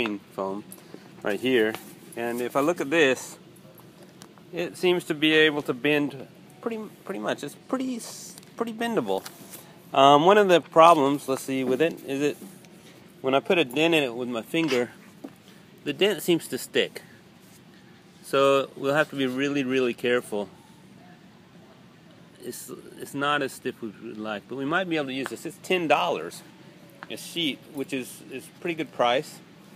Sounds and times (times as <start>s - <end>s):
Speech: 0.0s - 3.4s, 4.5s - 9.3s, 9.9s - 12.4s, 13.2s - 15.0s, 15.8s - 17.1s, 18.2s - 20.5s, 22.3s - 29.5s.